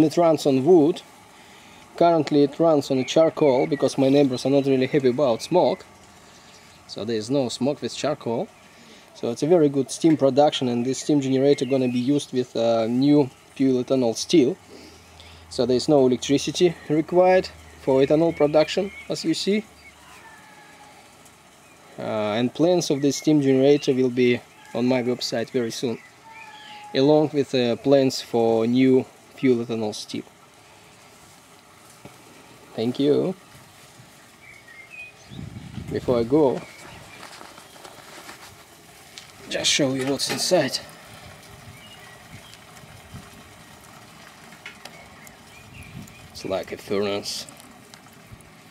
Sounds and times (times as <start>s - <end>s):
Speech: 0.0s - 1.1s, 2.0s - 5.9s, 6.9s - 8.5s, 9.2s - 14.6s, 15.5s - 19.7s, 22.0s - 26.0s, 27.0s - 30.3s, 32.7s - 33.4s, 35.9s - 36.7s, 39.4s - 40.9s, 46.4s - 47.6s.